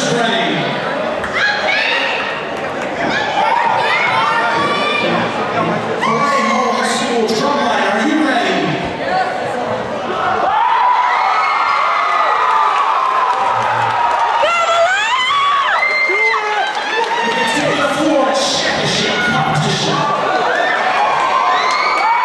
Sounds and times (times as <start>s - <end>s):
Speech: 4.0s - 9.9s, 17.2s - 20.2s.